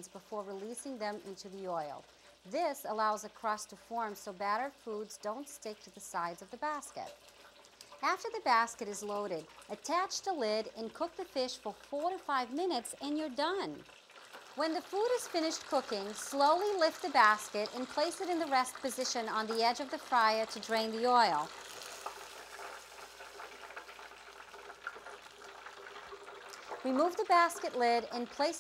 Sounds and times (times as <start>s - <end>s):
Speech: 0.0s - 7.1s, 8.0s - 13.8s, 14.6s - 21.5s, 26.9s - 28.6s
Frying (food): 0.0s - 28.6s.